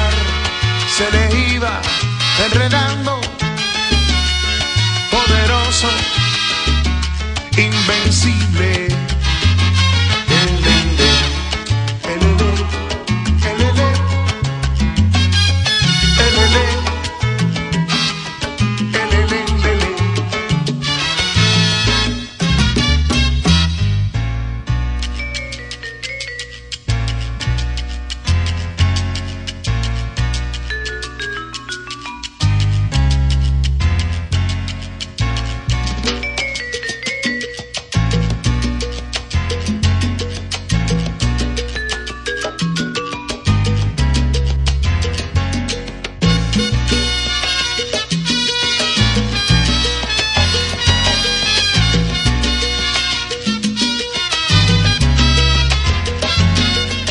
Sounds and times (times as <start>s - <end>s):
Music: 0.0s - 57.1s.